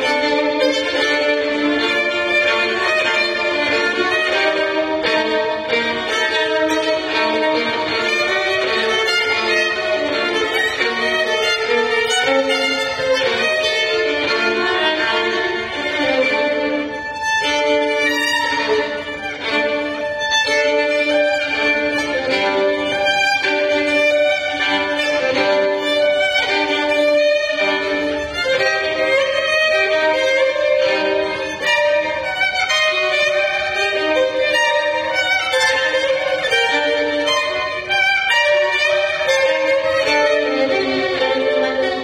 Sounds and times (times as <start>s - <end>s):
Violin, fiddle: 0.0s - 42.0s.